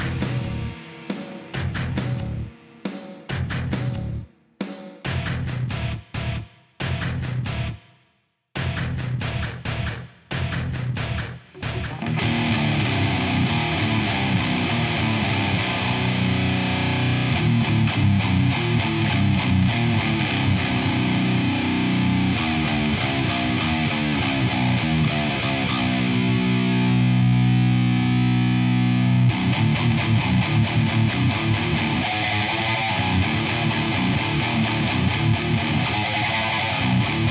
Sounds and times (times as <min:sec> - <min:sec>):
Music: 0:00.0 - 0:37.3.